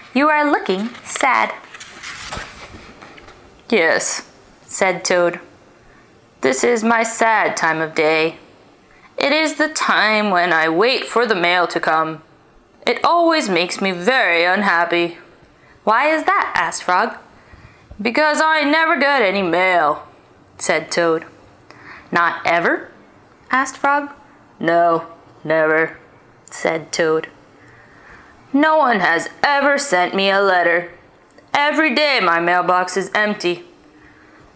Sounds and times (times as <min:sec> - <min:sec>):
Speech: 0:00.1 - 0:01.6, 0:03.7 - 0:05.5, 0:06.4 - 0:08.4, 0:09.2 - 0:15.3, 0:15.9 - 0:17.3, 0:18.0 - 0:21.4, 0:22.1 - 0:27.4, 0:28.5 - 0:33.7.